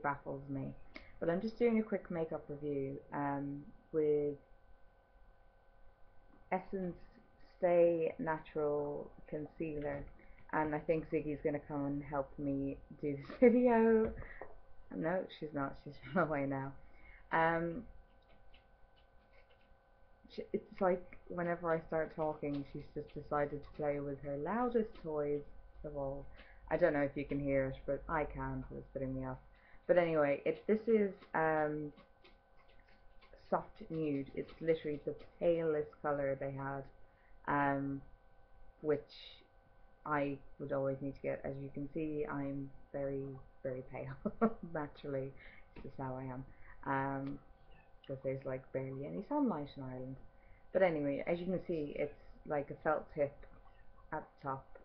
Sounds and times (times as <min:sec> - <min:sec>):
Speech: 0:00.0 - 0:04.5, 0:06.5 - 0:17.9, 0:20.3 - 0:32.0, 0:33.4 - 0:38.1, 0:38.8 - 0:47.4, 0:48.0 - 0:53.4, 0:54.1 - 0:54.8.